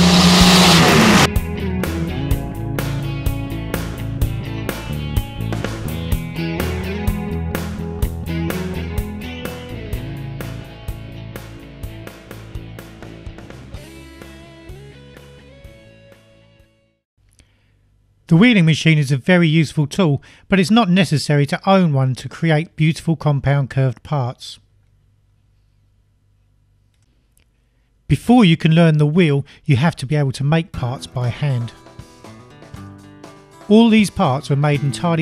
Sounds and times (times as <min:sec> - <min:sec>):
Music: 0:00.0 - 0:17.0, 0:30.7 - 0:35.2.